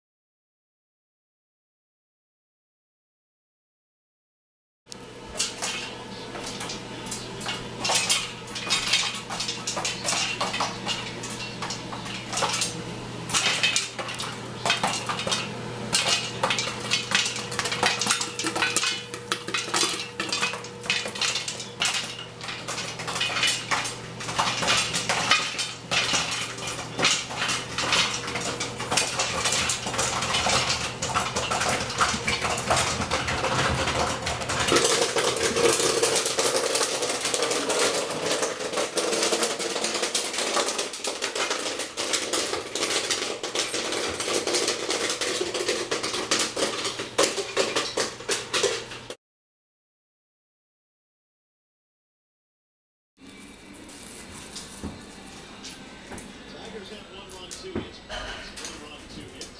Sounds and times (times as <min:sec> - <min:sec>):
Dishes, pots, and pans: 0:07.4 - 0:36.3, 0:58.1 - 0:58.8.